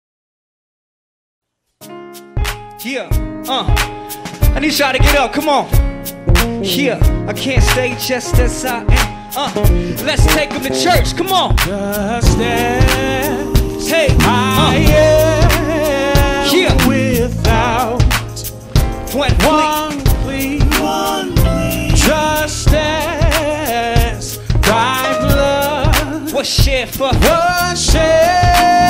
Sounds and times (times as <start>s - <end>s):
Music: 1.5s - 28.9s
Male singing: 6.6s - 18.2s, 19.1s - 28.9s.